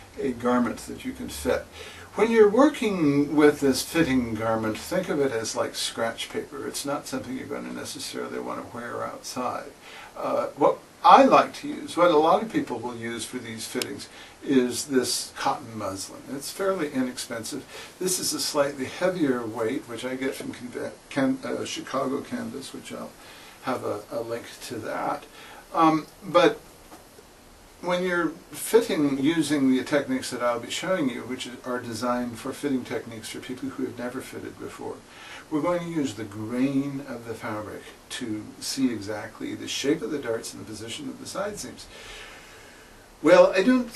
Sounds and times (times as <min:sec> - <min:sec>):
Speech: 0:00.0 - 0:26.6, 0:27.8 - 0:42.0, 0:43.2 - 0:43.9.